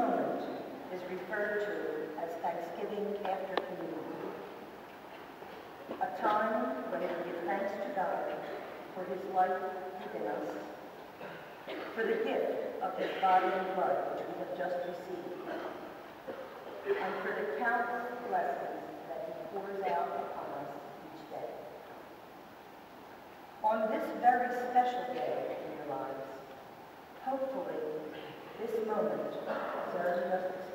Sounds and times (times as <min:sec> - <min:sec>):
Female speech, woman speaking: 0:00.0 - 0:04.5, 0:06.0 - 0:10.8, 0:11.9 - 0:15.6, 0:16.8 - 0:21.7, 0:23.6 - 0:26.4, 0:27.2 - 0:30.7.